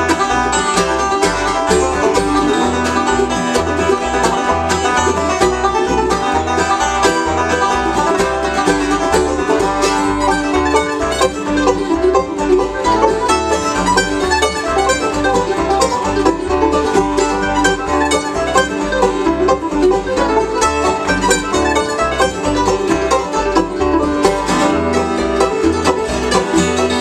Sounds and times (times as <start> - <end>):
Bluegrass: 0.0 - 27.0.